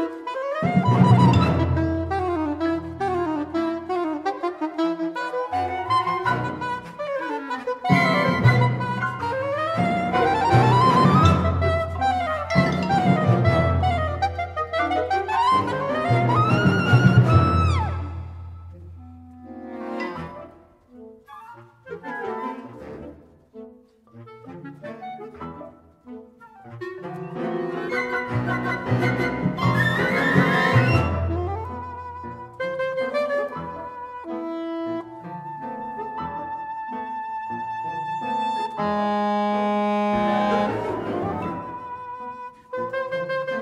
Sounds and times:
Music: 0.0 - 43.6.

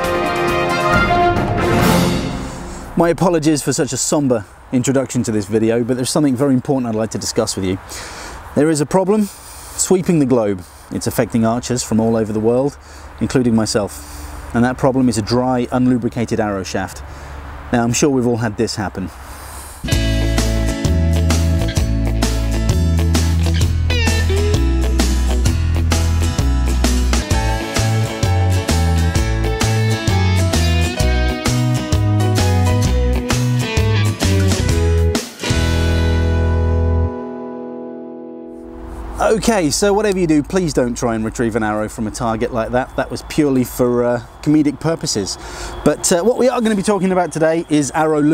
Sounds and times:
Music: 0.0 - 2.9, 19.9 - 39.0.

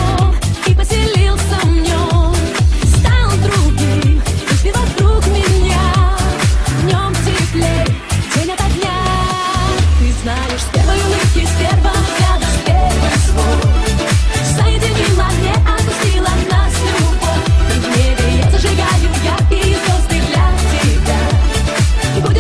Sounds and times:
Soundtrack music: 1.4 - 22.4.

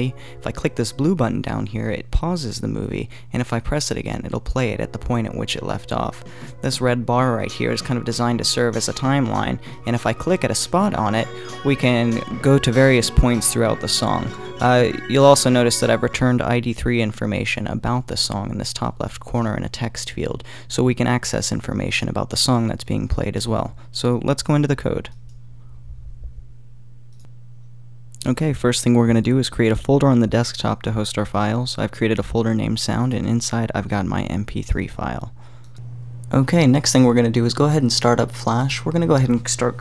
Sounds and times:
Music: 0.0 - 1.8, 4.6 - 16.8
Speech: 0.0 - 25.2, 28.2 - 35.4, 36.3 - 39.8.

